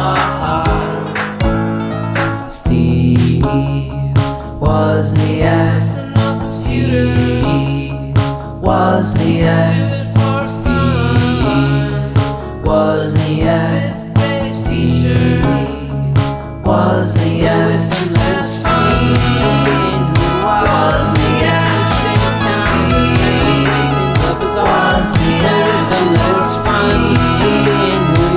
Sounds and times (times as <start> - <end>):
Independent music: 0.0 - 28.3.